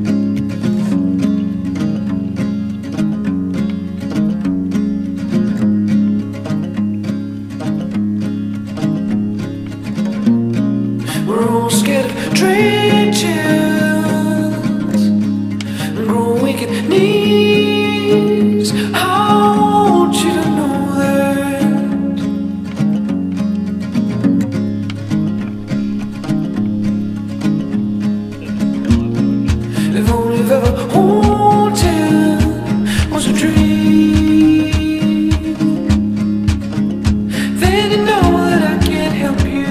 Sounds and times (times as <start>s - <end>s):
Music: 0.0s - 39.7s.